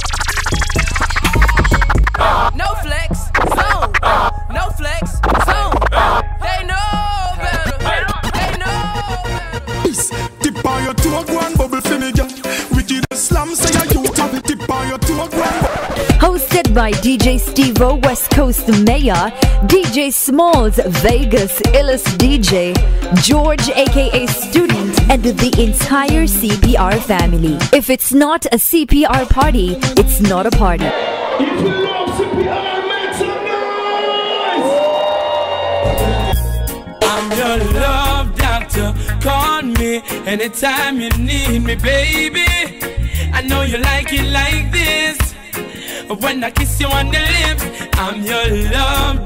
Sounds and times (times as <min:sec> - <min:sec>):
Music of Africa: 0:00.0 - 0:04.3, 0:05.2 - 0:19.9, 0:20.6 - 0:27.8, 0:35.7 - 0:49.2
Reggae: 0:00.0 - 0:27.8, 0:29.1 - 0:49.2.